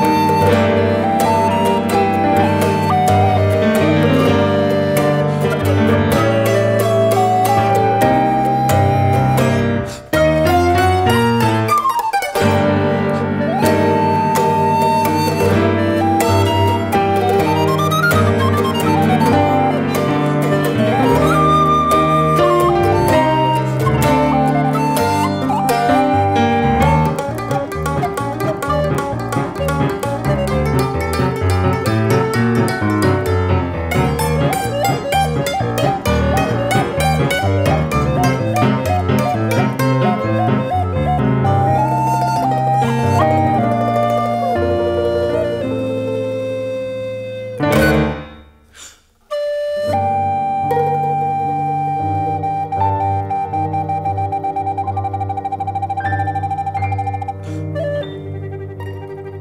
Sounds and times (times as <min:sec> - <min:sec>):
Guitar: 0:00.0 - 0:48.7, 0:49.3 - 0:59.4
Bowed string instrument: 0:00.0 - 0:59.4
Mandolin: 0:00.0 - 0:59.4
Piano: 0:00.0 - 0:59.4.